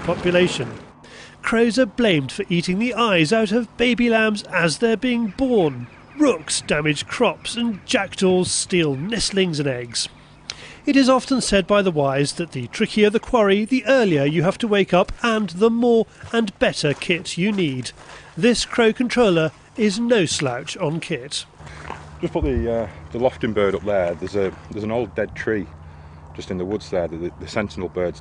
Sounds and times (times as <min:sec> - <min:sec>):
Speech: 0:00.0 - 0:00.8, 0:01.4 - 0:10.1, 0:10.9 - 0:21.5, 0:22.2 - 0:25.7, 0:26.4 - 0:28.2.